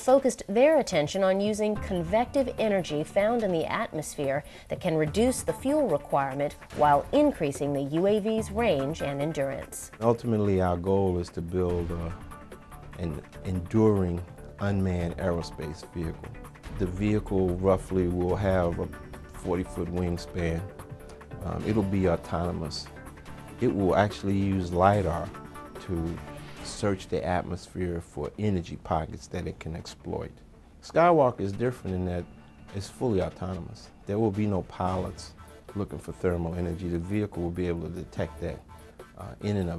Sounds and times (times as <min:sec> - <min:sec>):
Speech: 0:00.0 - 0:12.2, 0:13.0 - 0:16.2, 0:16.8 - 0:20.7, 0:21.4 - 0:22.9, 0:23.6 - 0:25.3, 0:25.9 - 0:32.2, 0:32.8 - 0:38.6, 0:39.2 - 0:39.7
Music: 0:00.0 - 0:39.7.